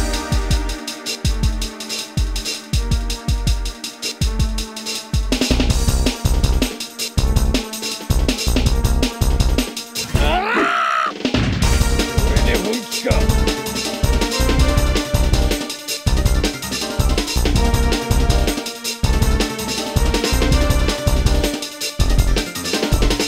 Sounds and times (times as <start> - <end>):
Music: 0.0 - 23.2.